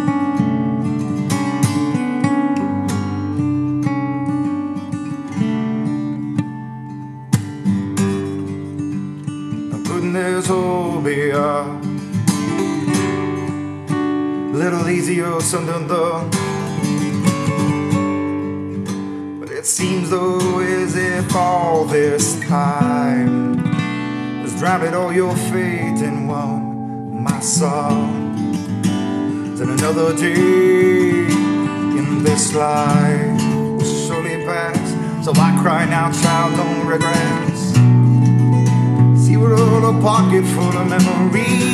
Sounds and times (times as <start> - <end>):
Acoustic guitar: 0.0 - 41.7.